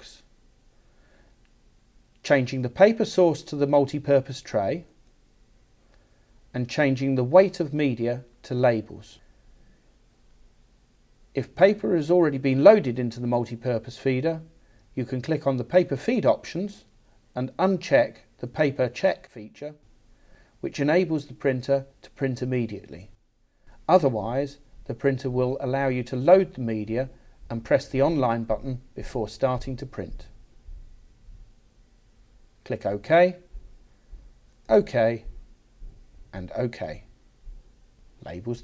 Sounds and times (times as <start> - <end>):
Speech: 0.0 - 0.3, 2.2 - 5.0, 6.5 - 9.2, 11.4 - 19.8, 20.6 - 23.2, 23.8 - 30.3, 32.6 - 33.5, 34.7 - 35.3, 36.3 - 37.1, 38.2 - 38.6.